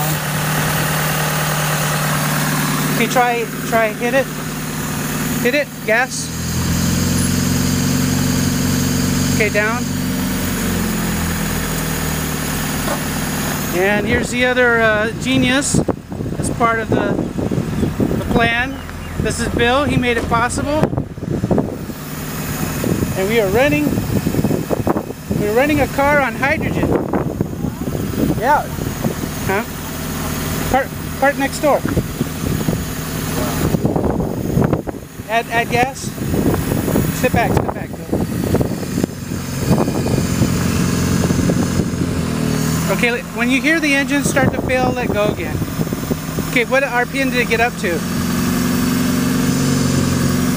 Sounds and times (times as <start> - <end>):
Car: 0.0 - 50.5
Speech: 3.0 - 4.3, 5.4 - 6.3, 9.4 - 9.9, 13.7 - 15.8, 18.2 - 20.9, 23.2 - 24.0, 25.4 - 27.0, 28.4 - 28.8, 29.5 - 29.7, 30.7 - 32.0, 35.3 - 36.2, 37.2 - 38.1, 42.9 - 45.6, 46.5 - 48.0.